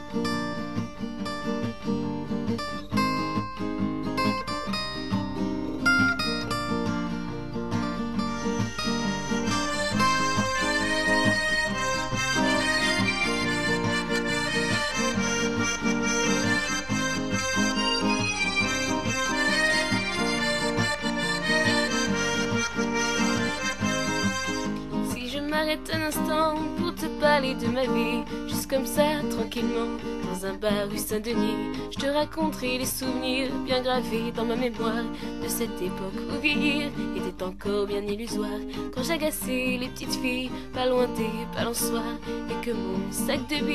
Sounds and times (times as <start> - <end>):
Music: 0.0 - 43.7.